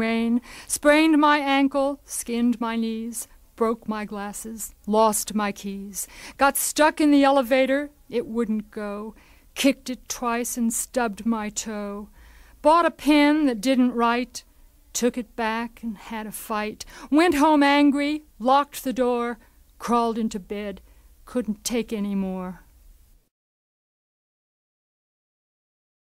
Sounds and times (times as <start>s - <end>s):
Speech: 0.0s - 22.7s.